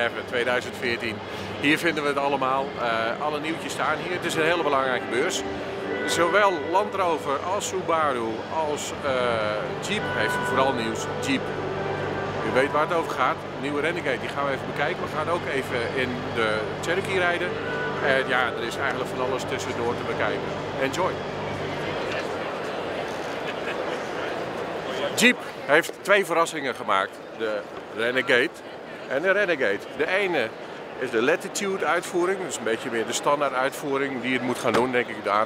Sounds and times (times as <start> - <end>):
Speech: 0.0 - 5.4, 6.0 - 11.4, 12.4 - 22.6, 24.9 - 35.4.